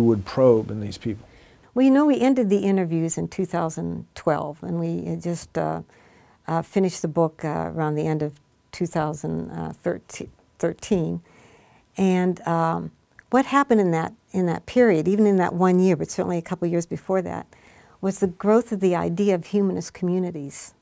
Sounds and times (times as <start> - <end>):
Inside, small room: 0.0 - 20.8.